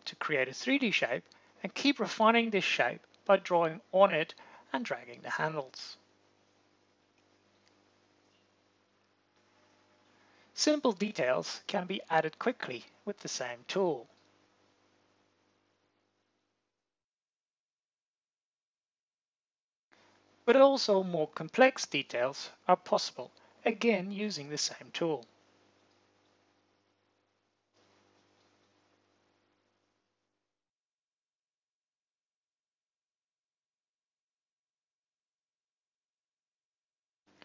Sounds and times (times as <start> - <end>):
Speech: 0.0 - 6.0, 10.6 - 14.2, 20.5 - 25.3.